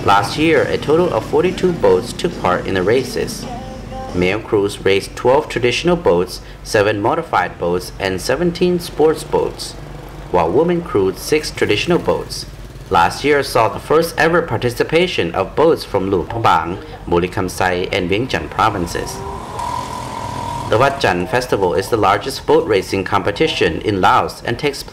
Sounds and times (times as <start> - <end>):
Speech: 0.0 - 3.5, 4.1 - 9.8, 10.4 - 19.2, 20.7 - 24.9.